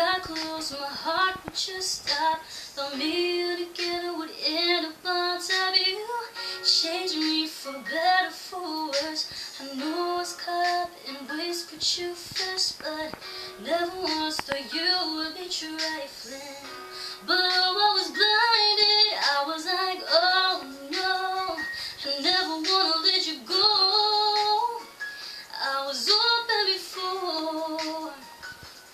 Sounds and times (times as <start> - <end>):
Female singing: 0.0 - 24.9, 25.5 - 28.3
Music: 0.0 - 28.9.